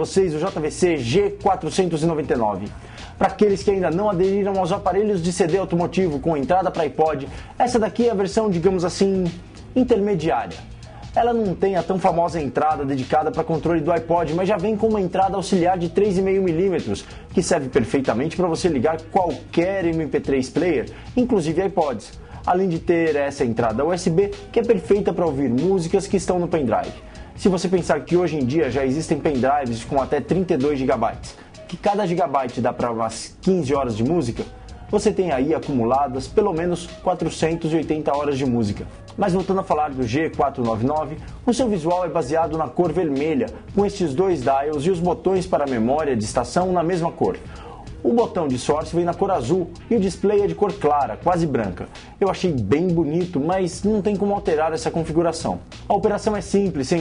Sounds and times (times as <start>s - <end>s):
Music: 0.0s - 57.0s
Speech: 0.0s - 57.0s.